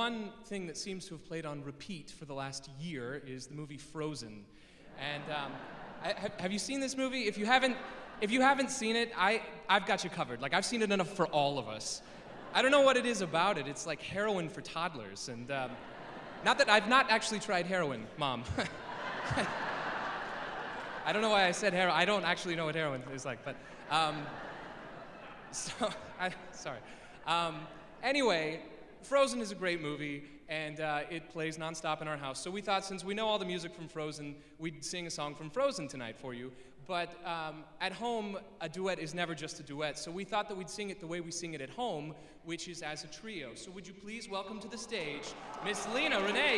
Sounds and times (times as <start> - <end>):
Speech: 0.0 - 15.8, 16.4 - 18.8, 21.0 - 24.4, 25.6 - 46.5.